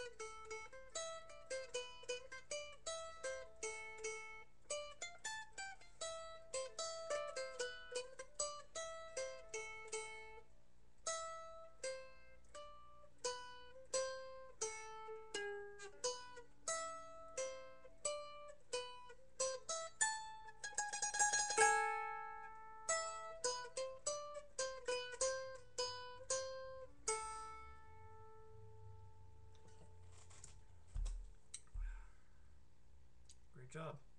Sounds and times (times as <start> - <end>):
Mandolin: 0.0 - 31.9
Inside, small room: 0.0 - 34.1.